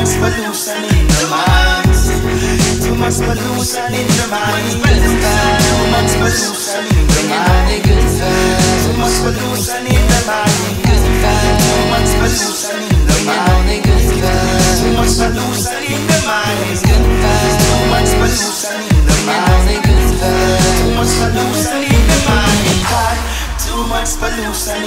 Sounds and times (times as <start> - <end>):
Grunge: 0.0 - 24.8.